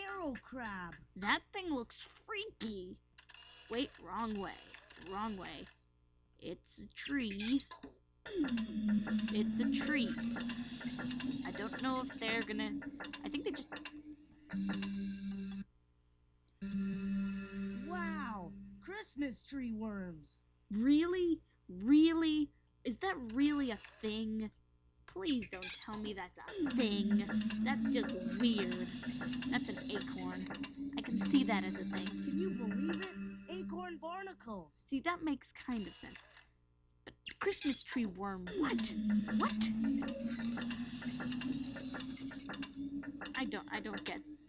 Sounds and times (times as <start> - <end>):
Speech: 0.0 - 3.0, 3.7 - 5.7, 6.4 - 7.7, 9.3 - 10.2, 11.5 - 13.7, 17.8 - 24.5, 25.1 - 28.9, 29.5 - 36.2, 37.4 - 39.8, 43.4 - 44.2.